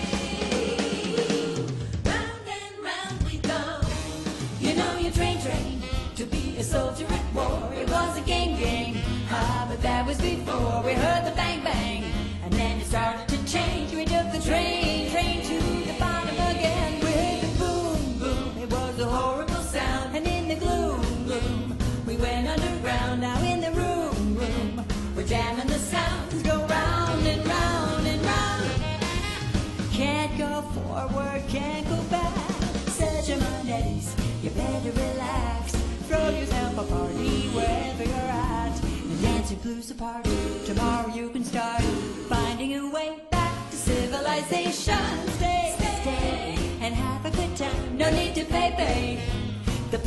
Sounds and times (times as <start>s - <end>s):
Female singing: 0.0s - 3.9s, 4.6s - 28.8s, 29.9s - 49.3s
Music: 0.0s - 50.0s.